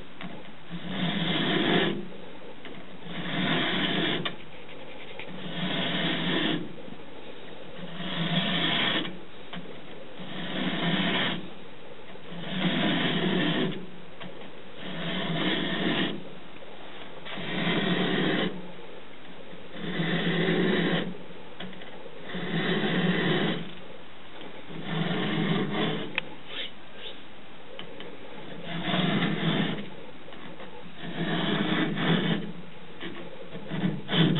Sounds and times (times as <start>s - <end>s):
Filing (rasp): 0.2s - 2.2s, 3.0s - 6.8s, 7.8s - 9.2s, 10.2s - 11.5s, 12.3s - 13.9s, 14.8s - 16.3s, 17.3s - 18.6s, 19.7s - 23.7s, 24.7s - 26.7s, 28.5s - 30.0s, 30.9s - 34.3s
Rub: 0.7s - 2.0s, 3.0s - 6.7s, 7.8s - 9.2s, 10.2s - 11.5s, 12.3s - 13.8s, 14.8s - 16.2s, 24.8s - 27.2s, 28.5s - 29.9s, 31.0s - 34.3s.